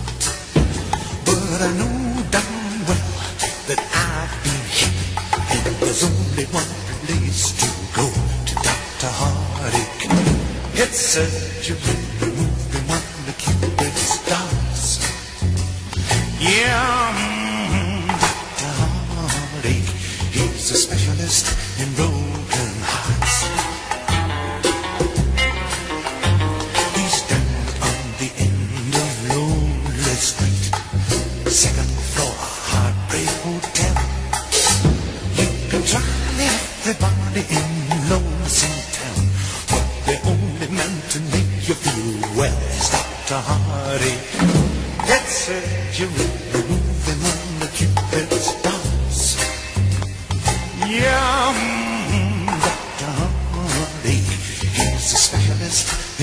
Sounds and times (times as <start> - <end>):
Blues: 0.0 - 56.2
Soundtrack music: 0.0 - 56.2
Dance music: 20.5 - 29.3.